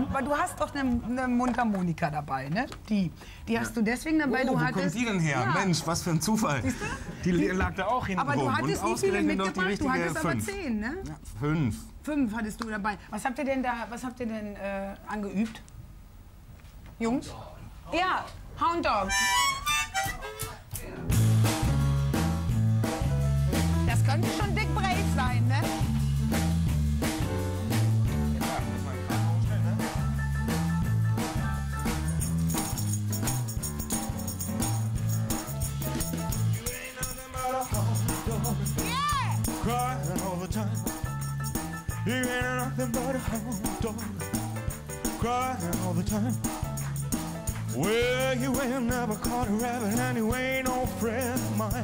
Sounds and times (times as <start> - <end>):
Music: 19.0 - 51.8.